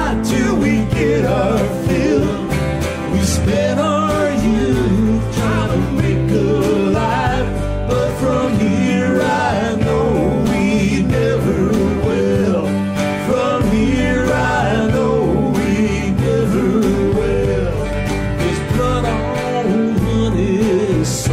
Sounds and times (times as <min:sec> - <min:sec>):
Country: 0:00.0 - 0:21.3
Singing: 0:00.0 - 0:21.3.